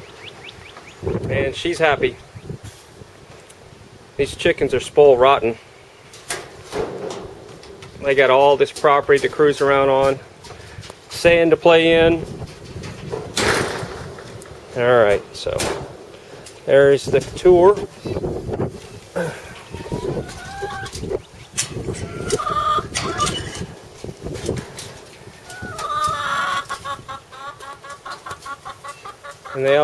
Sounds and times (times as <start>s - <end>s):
Speech: 1.3s - 2.2s, 4.2s - 5.6s, 8.0s - 10.2s, 11.1s - 12.3s, 14.7s - 15.8s, 16.7s - 18.2s, 29.6s - 29.8s
Chicken, rooster: 19.5s - 23.7s, 25.3s - 29.8s.